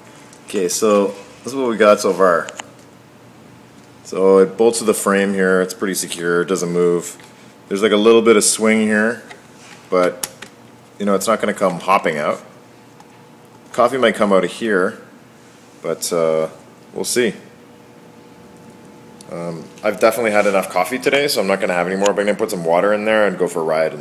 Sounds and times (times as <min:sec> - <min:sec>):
Speech: 0:00.5 - 0:02.6, 0:04.1 - 0:09.3, 0:09.9 - 0:10.2, 0:11.0 - 0:12.5, 0:13.7 - 0:15.1, 0:15.8 - 0:17.5, 0:19.2 - 0:24.0.